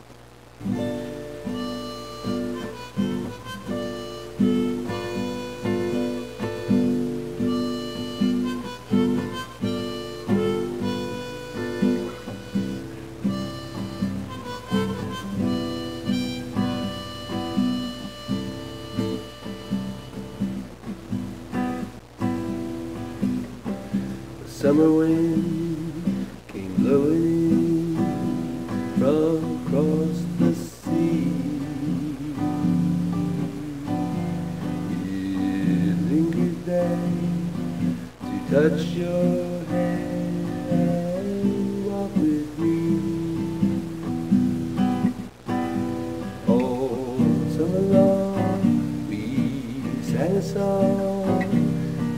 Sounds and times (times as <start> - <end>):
Music: 0.6 - 52.1.